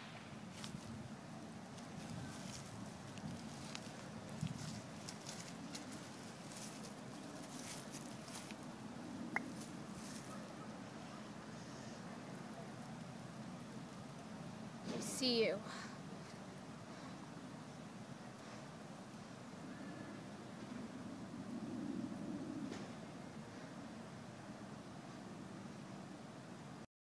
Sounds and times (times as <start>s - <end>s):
Speech: 14.9s - 15.9s.